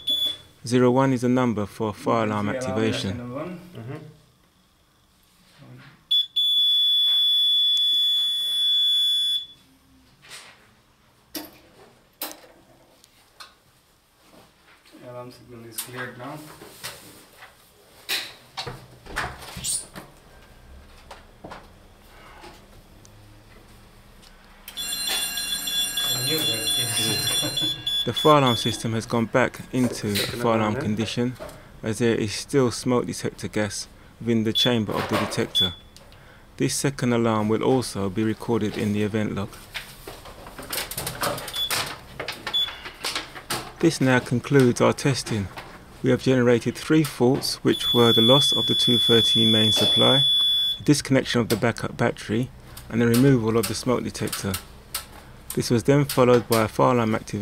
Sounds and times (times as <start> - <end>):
Alarm: 0.0 - 0.5, 6.1 - 9.7, 24.7 - 30.3, 34.6 - 34.8, 35.5 - 36.0, 41.5 - 41.8, 42.6 - 42.8, 47.7 - 50.9.